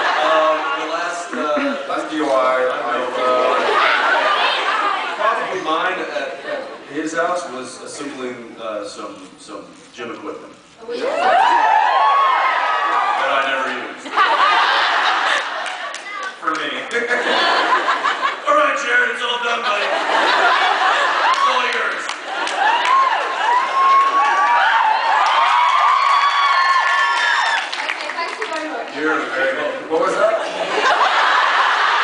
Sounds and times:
Inside, large room or hall: 0.0 - 32.0.

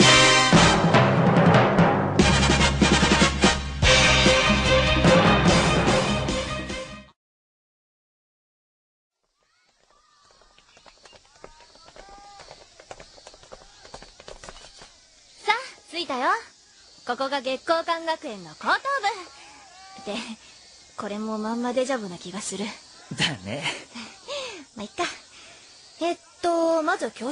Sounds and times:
Speech: 11.3 - 13.0, 24.8 - 25.2, 26.0 - 27.3.

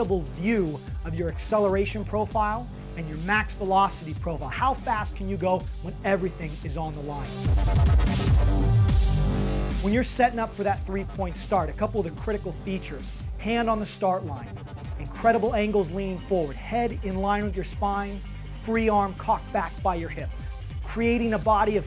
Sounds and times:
Speech: 0.0 - 7.3, 9.8 - 20.3, 20.9 - 21.8
Music: 0.0 - 21.8.

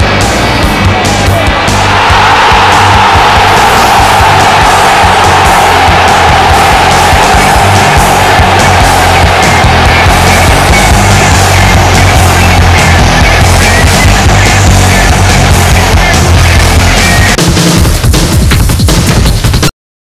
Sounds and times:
Music: 0.0 - 19.7.

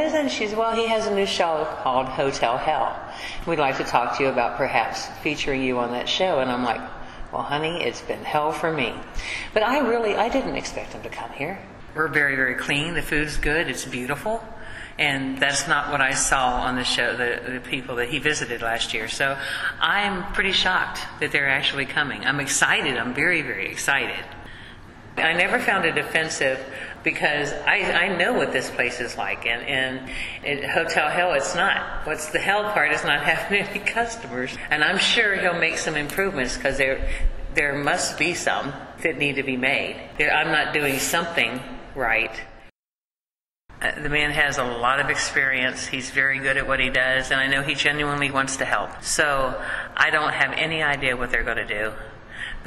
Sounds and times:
Speech: 0.0 - 24.4, 25.2 - 42.6, 43.8 - 52.6.

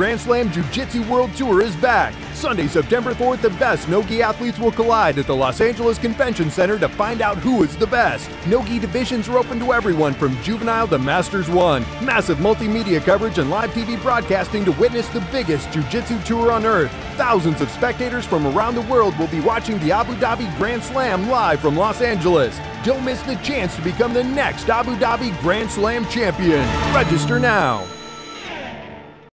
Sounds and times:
Speech: 0.0 - 27.9
Music: 0.0 - 29.3.

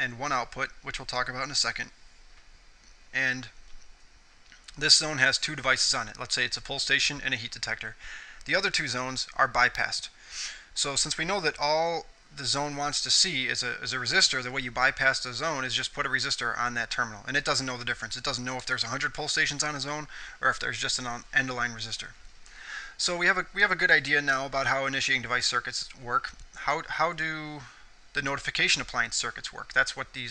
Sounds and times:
Speech: 0.0 - 2.0, 3.1 - 3.6, 4.7 - 10.2, 10.8 - 22.2, 23.0 - 30.3.

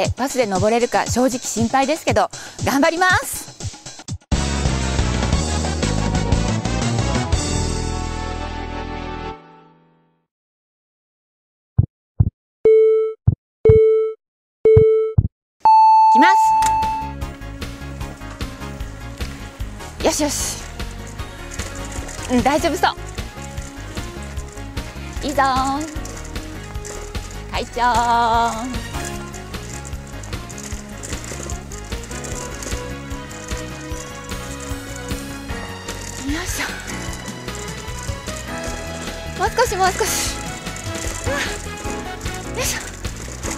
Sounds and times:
Music: 0.0 - 10.3, 16.4 - 43.5.

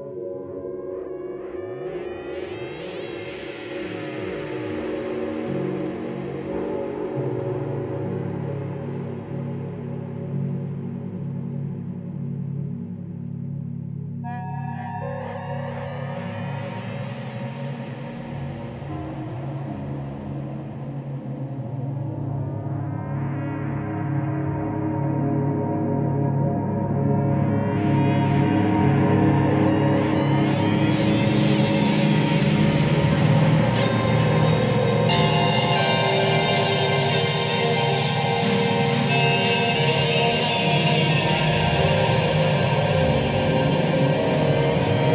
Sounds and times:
Gong: 29.8 - 45.1.

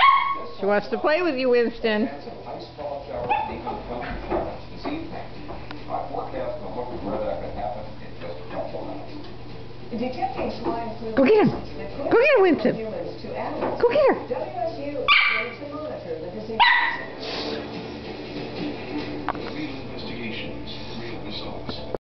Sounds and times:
Bow-wow: 0.0 - 0.5, 3.3 - 3.8, 15.1 - 15.6, 16.6 - 17.2
Music: 3.0 - 15.0, 15.6 - 22.0.

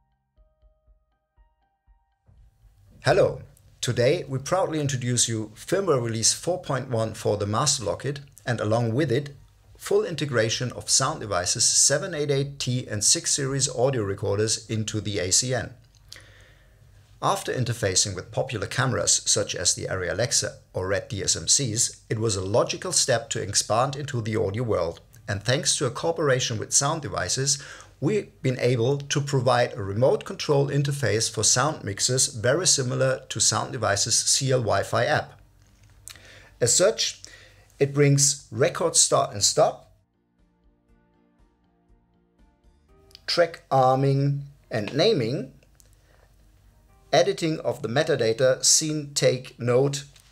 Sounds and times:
Speech: 3.0 - 15.8, 17.2 - 35.4, 36.6 - 37.2, 37.8 - 39.9, 43.2 - 45.6, 47.1 - 50.1.

